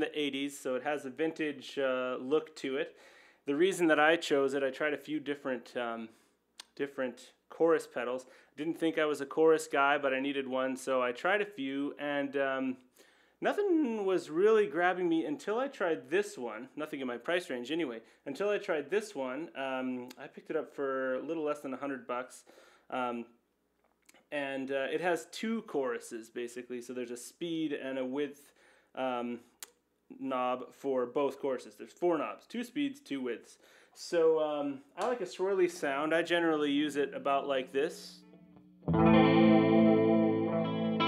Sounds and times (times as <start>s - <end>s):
Speech: 0.0s - 23.4s, 24.3s - 38.2s.